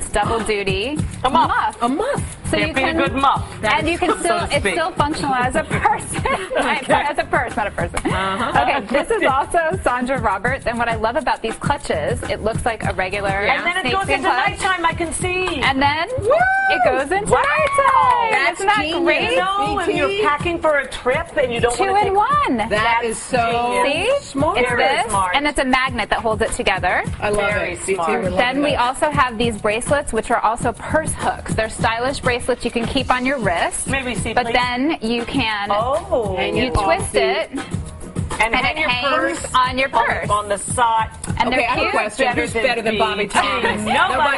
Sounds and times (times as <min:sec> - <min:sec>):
Music: 0:00.0 - 0:44.3.